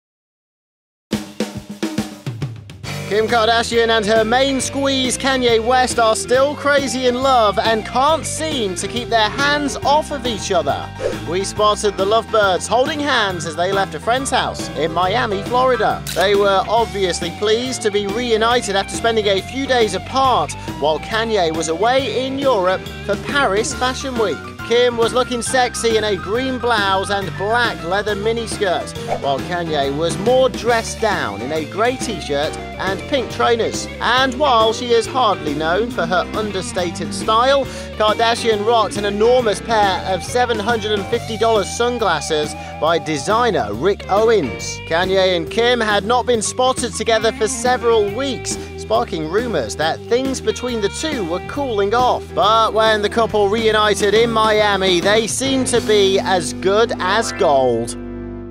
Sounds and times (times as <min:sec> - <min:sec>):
Music: 0:01.1 - 0:58.5
Speech: 0:03.1 - 0:58.0.